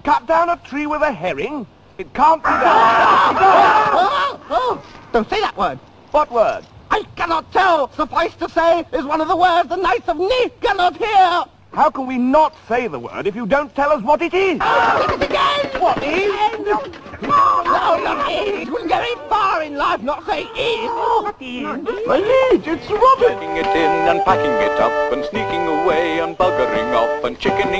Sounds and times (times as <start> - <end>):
Speech: 5.2 - 27.8.